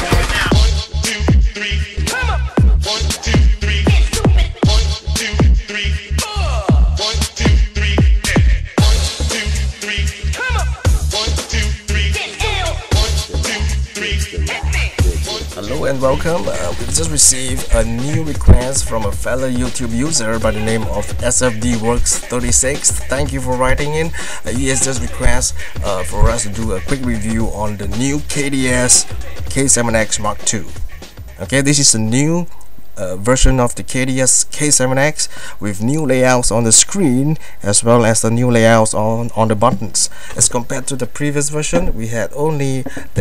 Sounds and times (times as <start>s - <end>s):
Music: 0.0s - 32.0s
Speech: 15.6s - 30.8s, 31.4s - 43.2s.